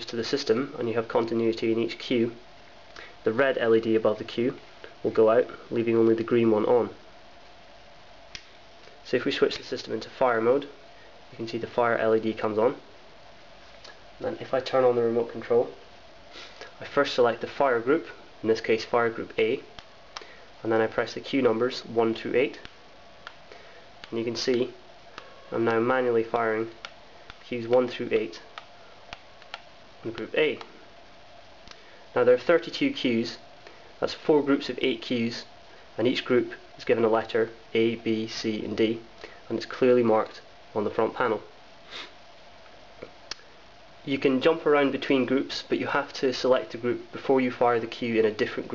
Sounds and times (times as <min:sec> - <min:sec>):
Speech: 0:00.0 - 0:02.4, 0:03.2 - 0:07.0, 0:09.0 - 0:12.9, 0:14.2 - 0:15.8, 0:16.8 - 0:19.7, 0:20.6 - 0:22.7, 0:24.1 - 0:24.8, 0:25.5 - 0:26.8, 0:27.4 - 0:28.5, 0:30.0 - 0:30.7, 0:32.2 - 0:33.4, 0:34.0 - 0:41.5, 0:44.1 - 0:48.7
Inside, small room: 0:00.0 - 0:48.7.